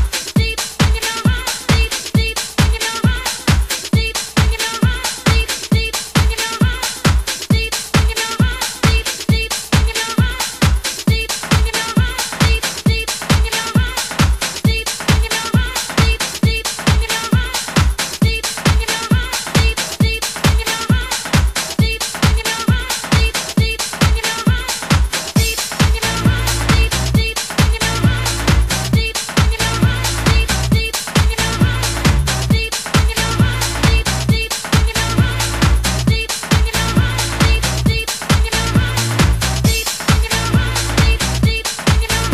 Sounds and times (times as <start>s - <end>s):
Dance music: 0.0s - 42.3s
Disco: 0.0s - 42.3s
Pop music: 0.0s - 42.3s.